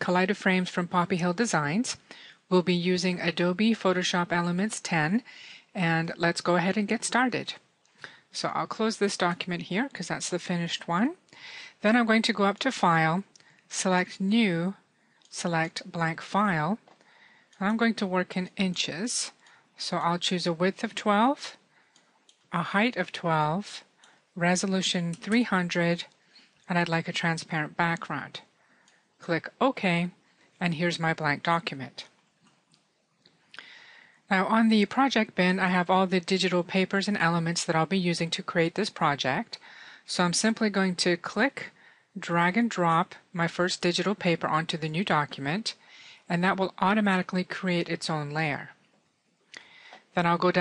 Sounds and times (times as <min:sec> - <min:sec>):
Speech: 0:00.0 - 0:07.6, 0:08.3 - 0:11.2, 0:11.8 - 0:16.8, 0:17.6 - 0:21.6, 0:22.5 - 0:26.1, 0:26.7 - 0:28.5, 0:29.2 - 0:32.1, 0:34.3 - 0:48.8, 0:50.1 - 0:50.6.